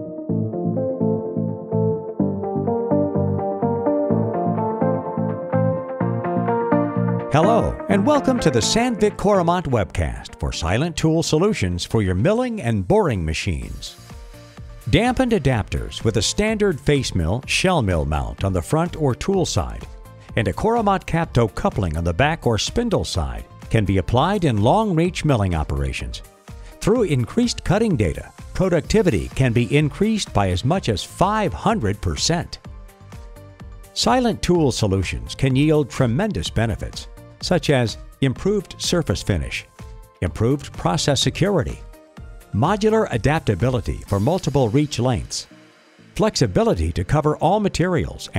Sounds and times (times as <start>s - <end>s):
Music: 0.0s - 48.3s
Speech: 7.4s - 14.0s, 14.9s - 32.6s, 34.0s - 41.8s, 42.6s - 45.5s, 46.2s - 48.3s.